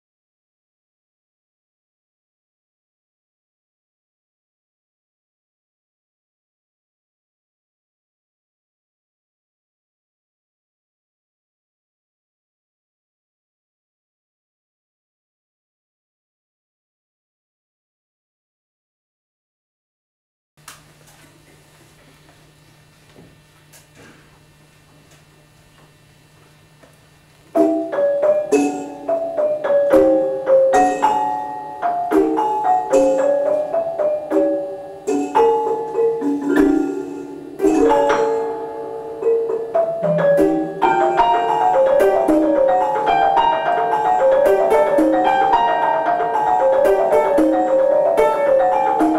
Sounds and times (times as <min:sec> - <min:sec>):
Music: 0:26.8 - 0:49.1.